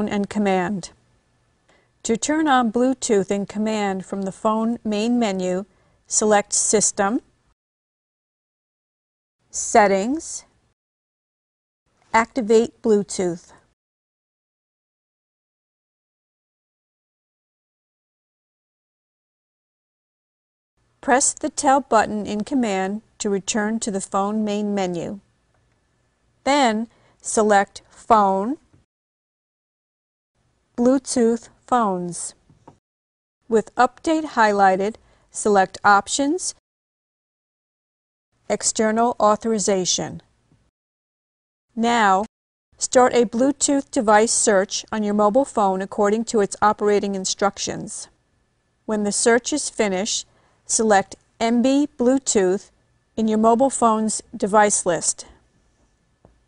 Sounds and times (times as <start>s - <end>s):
Speech: 0.0s - 1.0s, 2.0s - 7.3s, 9.6s - 10.6s, 12.2s - 13.6s, 21.0s - 25.2s, 26.5s - 28.7s, 30.8s - 32.4s, 33.5s - 36.6s, 38.5s - 40.3s, 41.8s - 48.2s, 48.9s - 55.4s.